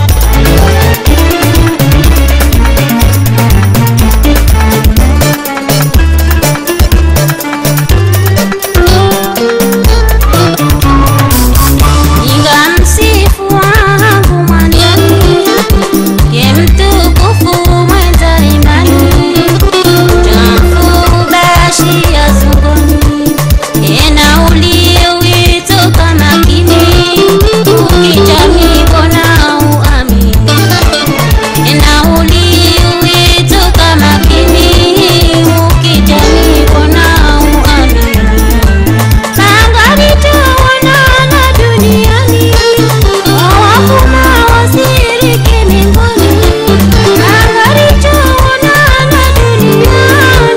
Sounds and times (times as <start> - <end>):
Funk: 0.0 - 50.5.